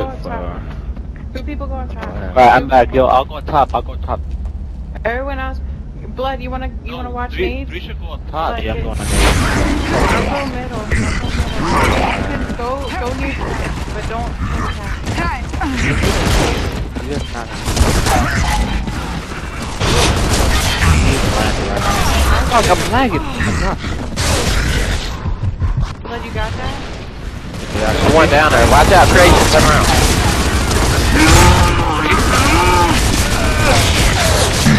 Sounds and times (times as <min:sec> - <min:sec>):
Speech: 0:01.4 - 0:04.2, 0:08.4 - 0:09.1, 0:21.1 - 0:23.2.